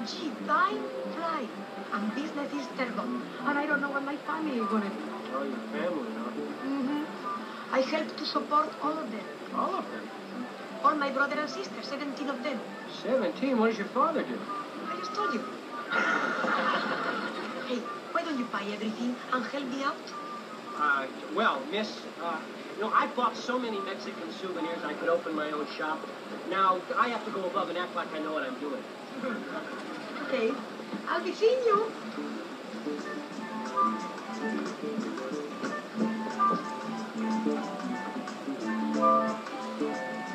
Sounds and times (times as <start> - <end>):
Music: 0.0 - 28.0, 30.4 - 40.3.